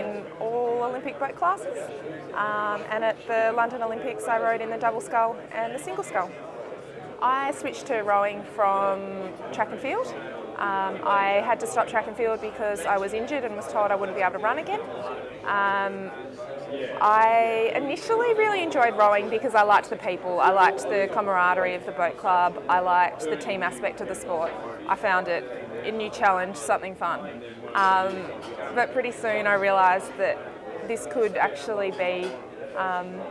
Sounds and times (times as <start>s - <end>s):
Speech: 0.0s - 6.4s, 7.2s - 33.3s.